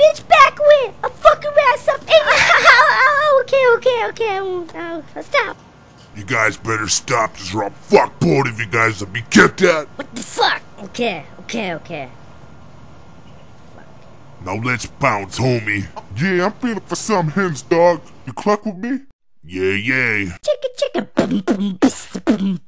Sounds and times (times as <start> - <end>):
Speech: 14.4 - 22.6.